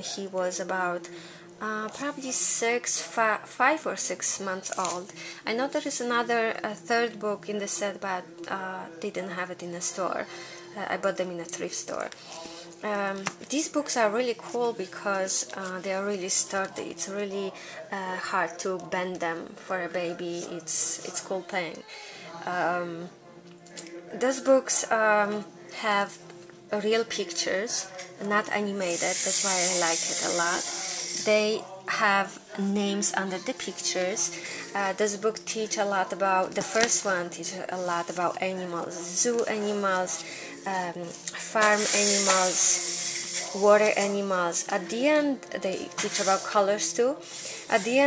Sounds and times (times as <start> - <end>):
Speech: 0.0 - 23.1, 23.8 - 48.0
Inside, small room: 0.0 - 48.0.